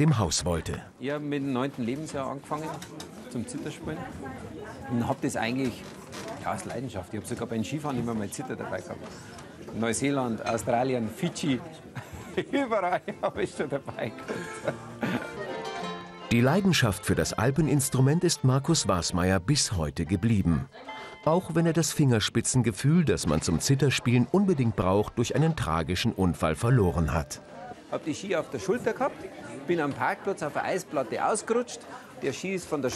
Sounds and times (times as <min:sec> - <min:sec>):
Speech: 0:00.0 - 0:05.8, 0:16.3 - 0:20.7, 0:21.3 - 0:27.4
Music: 0:12.1 - 0:25.6.